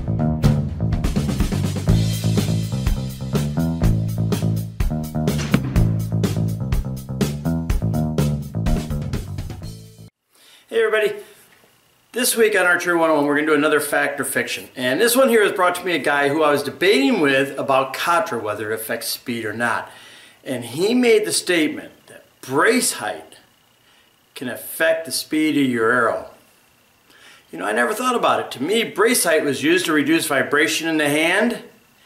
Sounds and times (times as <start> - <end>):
Speech: 10.7 - 11.3, 12.1 - 23.5, 24.4 - 26.4, 27.5 - 31.8.